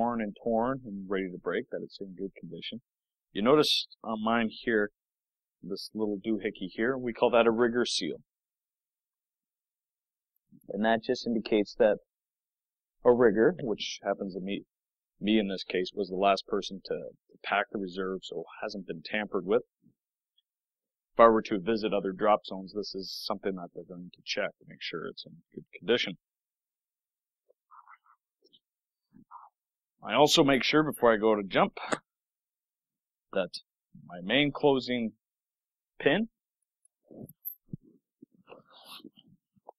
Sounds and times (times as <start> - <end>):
Speech: 0.0 - 5.0, 5.6 - 8.3, 10.6 - 12.1, 13.0 - 19.8, 21.2 - 26.3, 30.0 - 32.2, 33.3 - 35.2, 36.0 - 36.4.